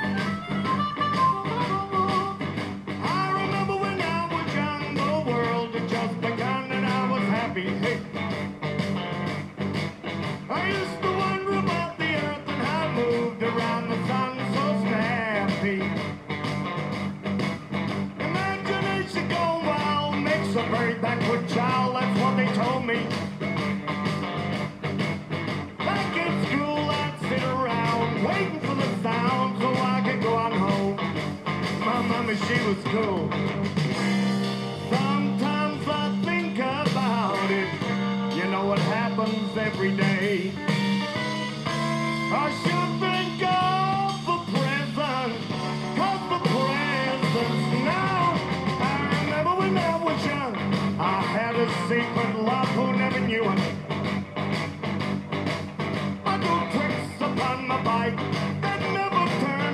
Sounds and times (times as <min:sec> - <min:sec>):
Music: 0:00.0 - 0:59.7.